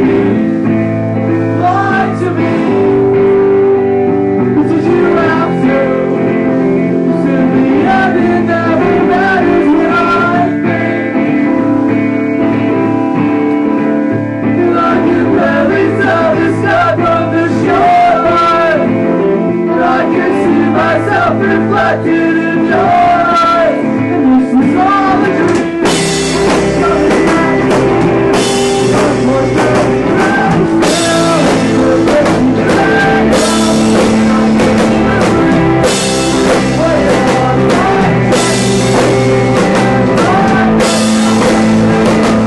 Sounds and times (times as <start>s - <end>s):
Music: 0.0s - 42.4s.